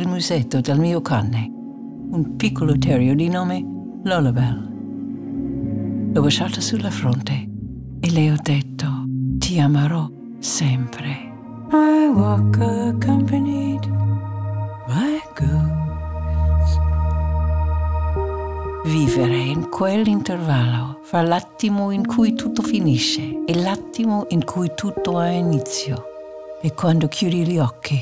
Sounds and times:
Speech: 0:00.0 - 0:01.5, 0:02.1 - 0:04.7, 0:06.2 - 0:11.3, 0:14.9 - 0:15.9, 0:18.8 - 0:28.0
Music: 0:00.0 - 0:28.0.

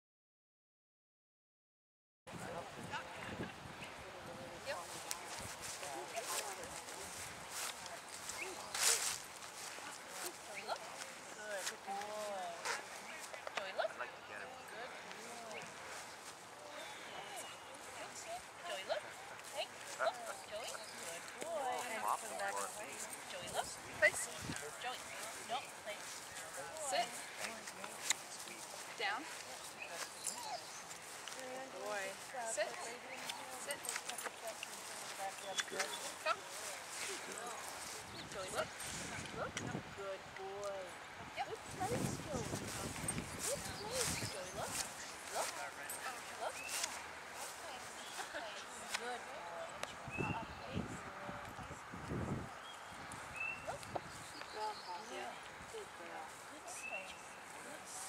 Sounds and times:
Speech: 0:16.7 - 0:30.6.

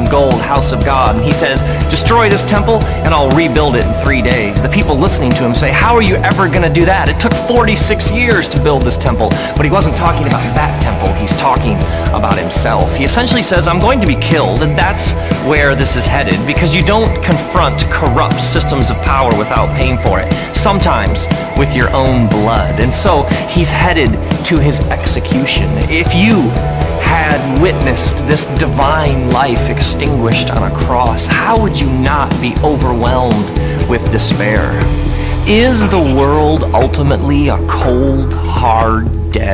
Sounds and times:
Music: 0:00.0 - 0:39.5
Speech: 0:00.0 - 0:39.5.

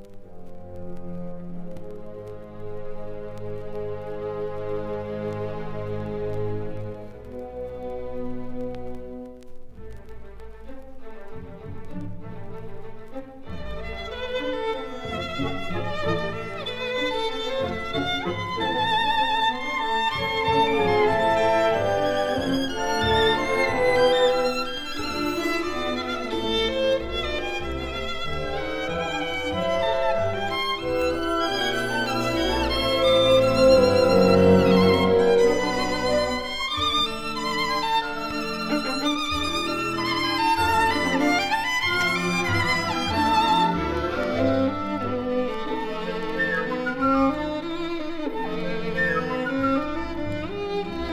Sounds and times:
Violin, fiddle: 0:02.0 - 0:51.1.

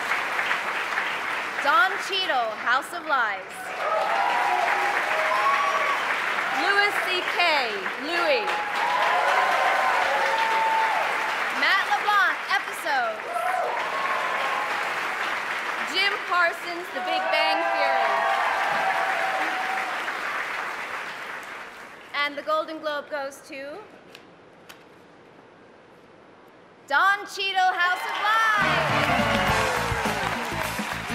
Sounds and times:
Applause: 0:00.0 - 0:22.2, 0:28.0 - 0:31.1.

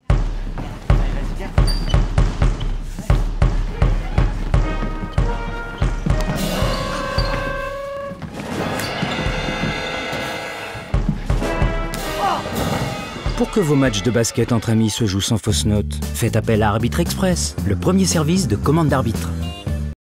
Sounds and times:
Music: 0:00.0 - 0:20.0
Speech: 0:13.3 - 0:19.3.

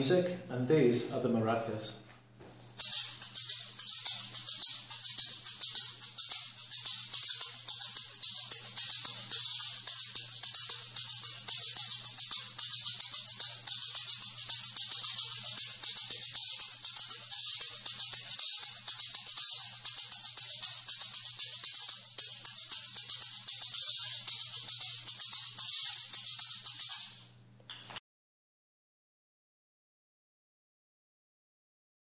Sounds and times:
Maraca: 0:02.6 - 0:28.0.

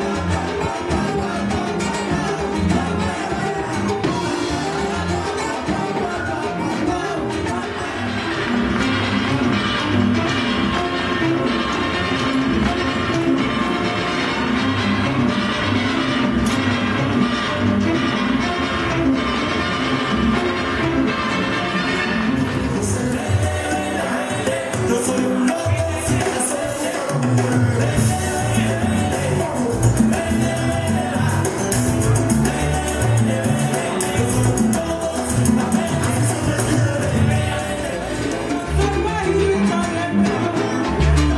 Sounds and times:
Dance music: 0:00.0 - 0:41.3.

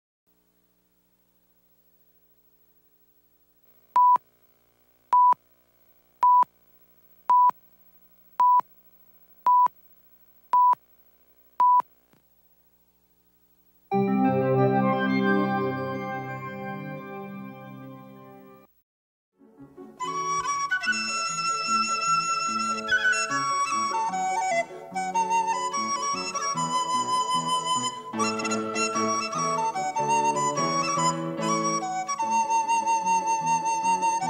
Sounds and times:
Flute: 0:19.9 - 0:34.3.

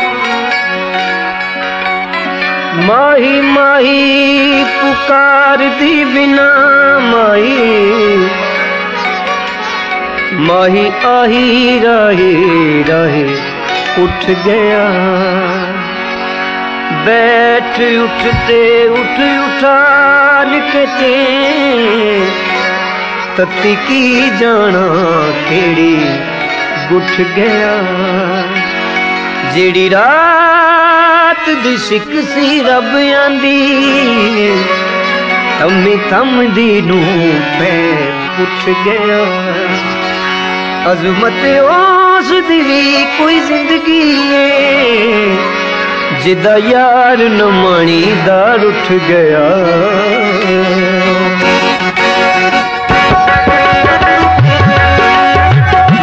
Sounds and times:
Carnatic music: 0:00.0 - 0:56.0
Singing: 0:02.0 - 0:56.0.

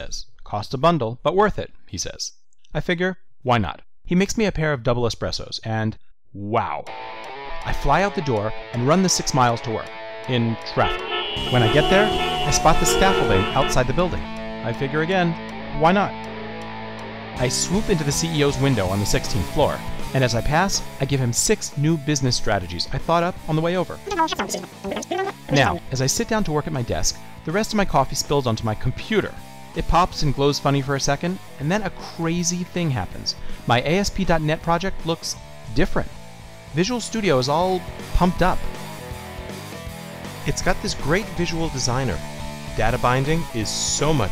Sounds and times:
Speech: 0:00.0 - 0:06.9, 0:07.6 - 0:16.2, 0:17.4 - 0:38.7, 0:40.4 - 0:44.3
Music: 0:06.8 - 0:44.3.

